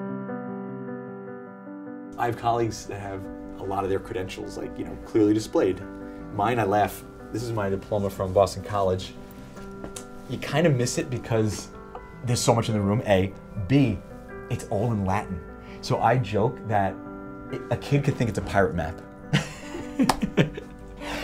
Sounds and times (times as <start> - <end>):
Speech: 2.2 - 5.8, 6.4 - 9.2, 10.3 - 17.0, 17.6 - 19.0.